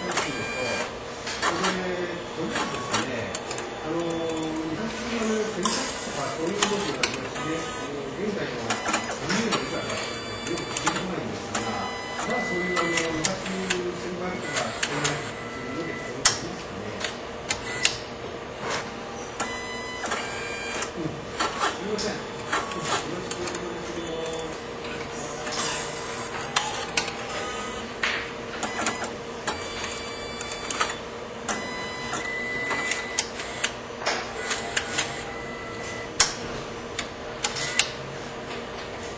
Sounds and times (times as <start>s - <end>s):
Speech: 0.0s - 17.2s, 20.8s - 27.0s
Printer: 0.0s - 39.1s.